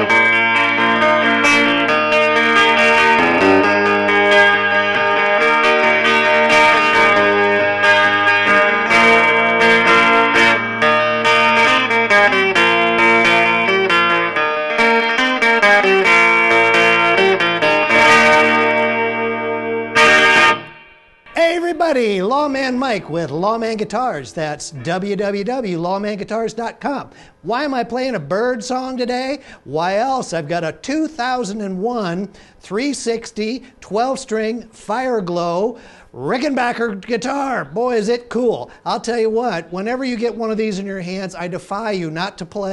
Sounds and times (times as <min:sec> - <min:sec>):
Electric guitar: 0:00.0 - 0:21.4
Strum: 0:00.0 - 0:25.2.